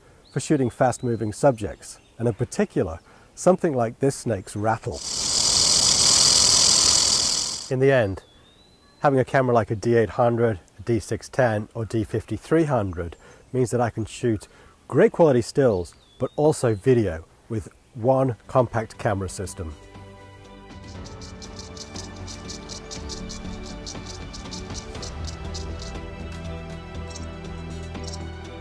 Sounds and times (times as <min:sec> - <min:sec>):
Outside, rural or natural: 0:00.0 - 0:28.6
Speech: 0:00.4 - 0:05.0, 0:07.7 - 0:08.2, 0:09.0 - 0:19.8.